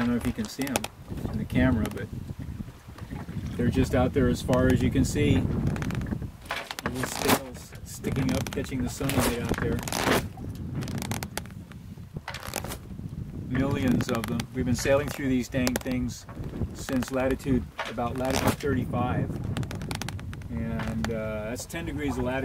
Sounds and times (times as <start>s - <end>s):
Speech: 0.0s - 2.1s, 3.6s - 5.4s, 6.9s - 10.0s, 13.5s - 19.3s, 20.5s - 22.4s
Ocean: 0.0s - 22.4s
Sailboat, sailing ship: 0.0s - 22.4s.